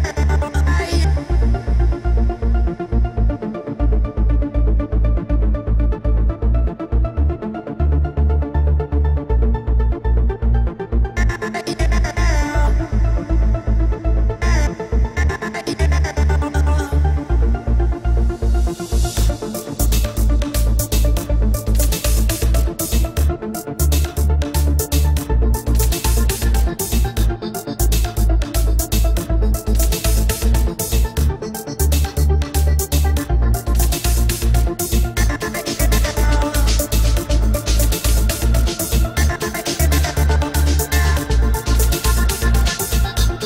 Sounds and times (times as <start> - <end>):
Techno: 0.0 - 43.4.